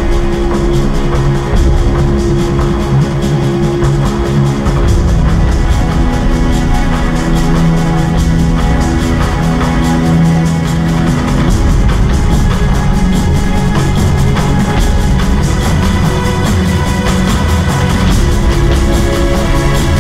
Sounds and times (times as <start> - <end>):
Music: 0.0 - 20.0.